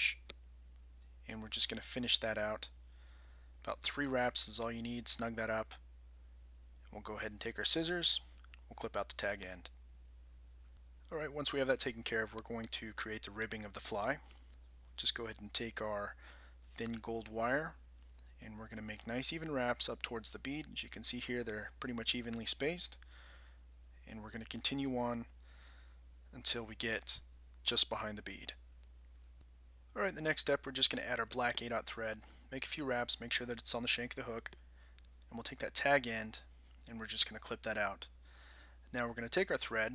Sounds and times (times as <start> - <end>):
Speech: 0.0 - 0.4, 1.2 - 2.8, 3.6 - 5.8, 6.8 - 9.8, 11.1 - 14.3, 15.0 - 17.8, 18.4 - 23.0, 24.0 - 25.3, 26.3 - 28.6, 29.9 - 34.6, 35.3 - 38.1, 38.9 - 39.9.